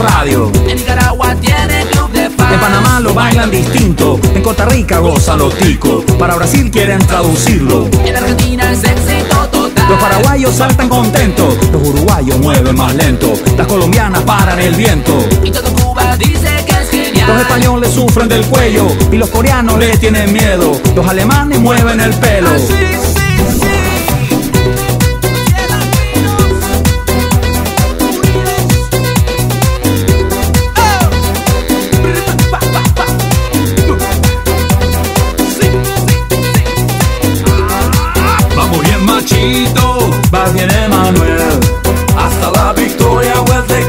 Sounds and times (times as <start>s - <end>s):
Singing: 0.0s - 29.6s, 30.6s - 33.2s, 35.4s - 43.8s
Disco: 0.0s - 43.8s
Pop music: 0.0s - 43.8s.